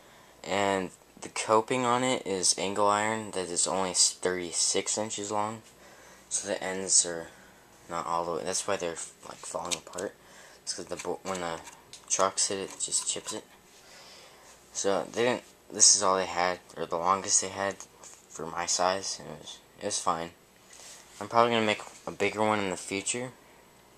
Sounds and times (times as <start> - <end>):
Speech: 0.4 - 5.7, 6.3 - 13.5, 14.7 - 20.4, 21.2 - 23.4.